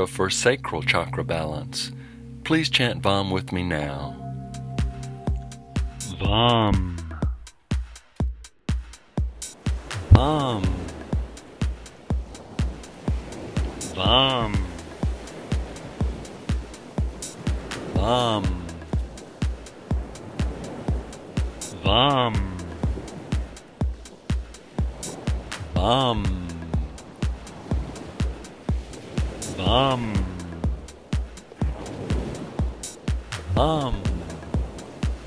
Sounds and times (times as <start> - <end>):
Mantra: 10.1 - 10.9, 14.0 - 14.8, 18.0 - 18.8, 21.8 - 22.6, 25.7 - 26.6, 29.6 - 30.4, 33.5 - 34.4.